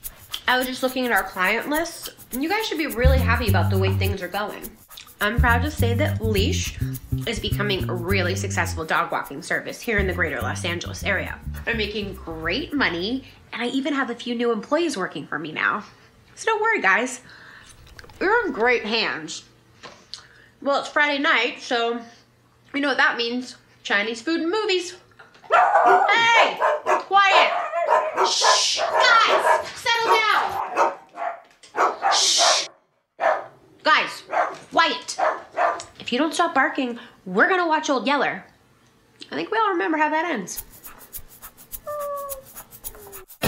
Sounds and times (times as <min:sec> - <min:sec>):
Speech: 0:00.5 - 0:17.2, 0:18.2 - 0:19.5, 0:20.6 - 0:25.1, 0:26.1 - 0:27.6, 0:28.3 - 0:30.6, 0:33.9 - 0:35.2, 0:36.0 - 0:38.6, 0:39.2 - 0:40.6
Bow-wow: 0:25.5 - 0:33.6, 0:34.3 - 0:34.6, 0:35.2 - 0:35.9.